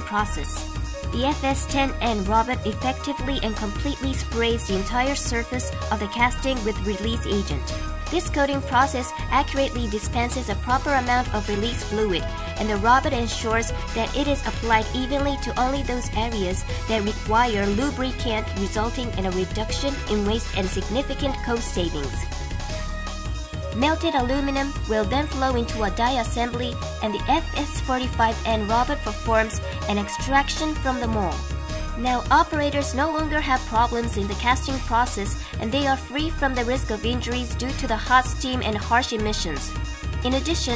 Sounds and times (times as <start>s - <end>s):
Speech: 0.0s - 22.2s, 23.8s - 31.4s, 32.0s - 40.7s
Music: 0.0s - 40.7s.